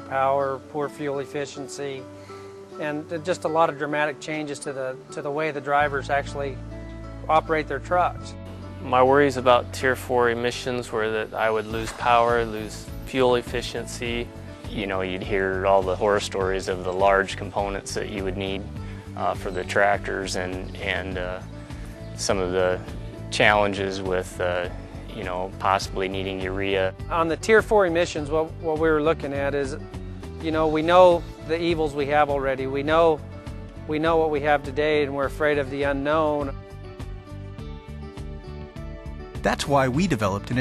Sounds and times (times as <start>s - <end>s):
Speech: 0.0s - 2.0s, 2.8s - 6.6s, 7.3s - 21.4s, 22.2s - 29.8s, 30.4s - 33.2s, 33.9s - 36.5s, 39.4s - 40.6s
Music: 0.0s - 40.6s.